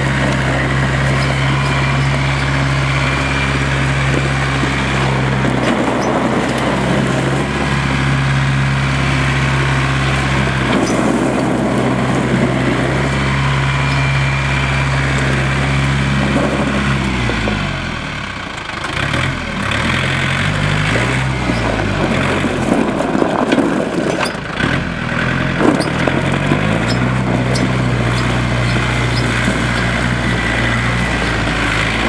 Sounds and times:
Outside, rural or natural: 0.0s - 32.0s
Vehicle: 0.0s - 32.0s.

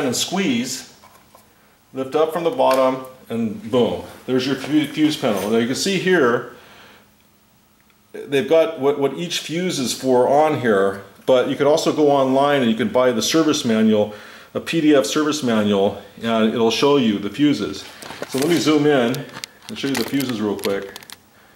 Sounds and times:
Speech: 0.0s - 1.0s, 2.0s - 6.5s, 8.1s - 21.0s
Inside, small room: 0.0s - 21.5s.

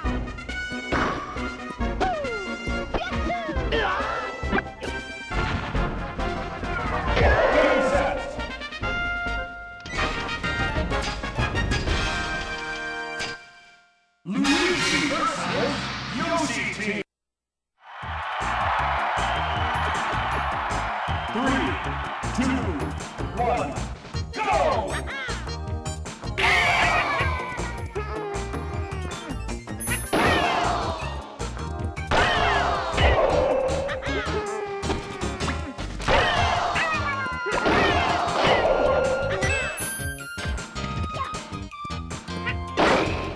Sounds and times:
Music: 0.0s - 16.9s, 18.0s - 43.3s
Speech: 14.3s - 17.1s, 21.3s - 21.8s, 23.4s - 23.8s.

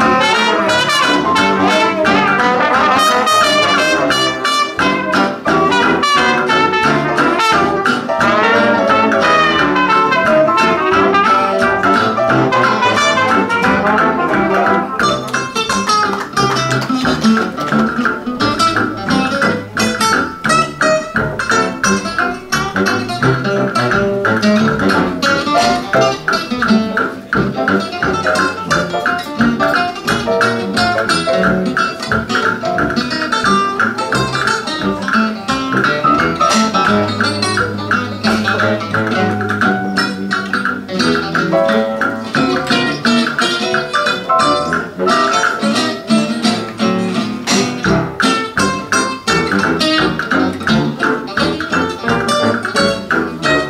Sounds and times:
Inside, large room or hall: 0.0s - 53.7s
Music: 0.0s - 53.7s.

